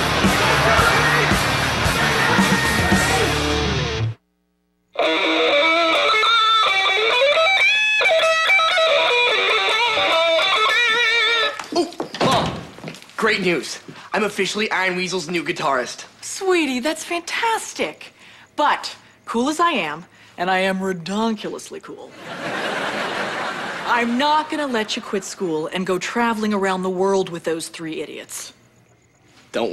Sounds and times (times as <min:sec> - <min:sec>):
Electric guitar: 0:00.0 - 0:04.2, 0:05.0 - 0:11.7
Tapping (guitar technique): 0:05.0 - 0:11.6.